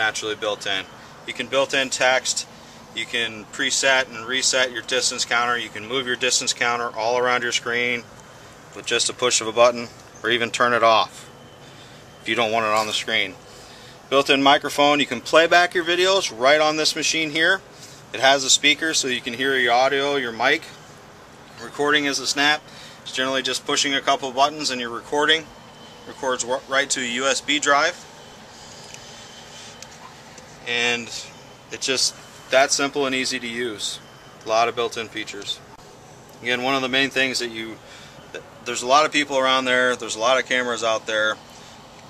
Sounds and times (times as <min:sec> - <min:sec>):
Speech: 0:00.0 - 0:08.1, 0:08.7 - 0:11.3, 0:12.2 - 0:13.4, 0:14.1 - 0:20.8, 0:21.6 - 0:25.5, 0:26.1 - 0:28.0, 0:30.6 - 0:35.8, 0:36.4 - 0:41.4.